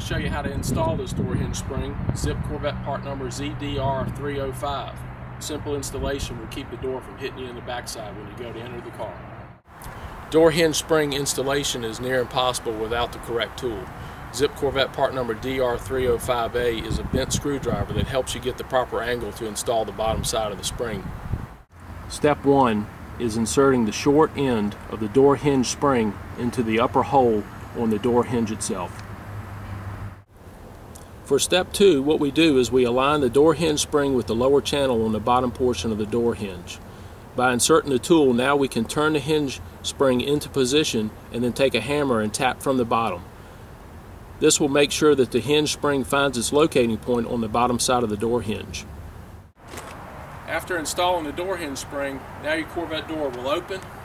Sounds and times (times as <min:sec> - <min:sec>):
Speech: 0:00.0 - 0:09.2, 0:10.3 - 0:21.1, 0:22.1 - 0:29.0, 0:31.3 - 0:36.8, 0:37.4 - 0:43.2, 0:44.4 - 0:48.8, 0:50.5 - 0:53.9.